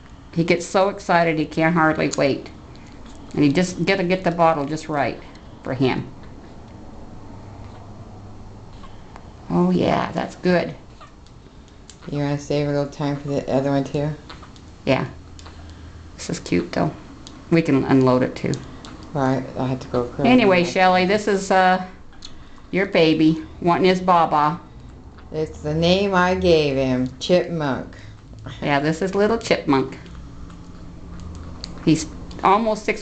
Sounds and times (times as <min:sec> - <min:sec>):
Speech: 0:00.4 - 0:02.5, 0:03.4 - 0:06.1, 0:09.5 - 0:10.8, 0:12.1 - 0:14.2, 0:14.9 - 0:15.2, 0:16.2 - 0:18.6, 0:19.2 - 0:22.0, 0:25.3 - 0:30.1, 0:31.8 - 0:33.0.